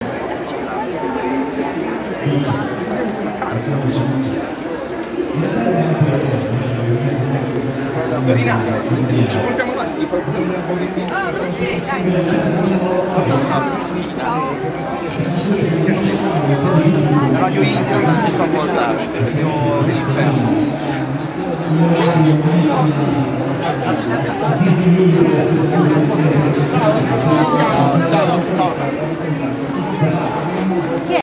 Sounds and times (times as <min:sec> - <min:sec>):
Speech: 0:00.0 - 0:31.2.